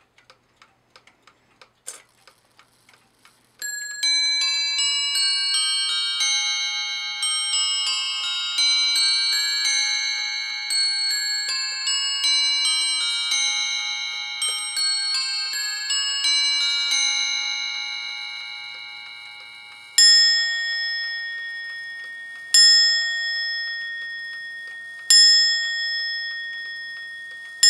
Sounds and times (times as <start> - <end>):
Bell: 3.6 - 27.6.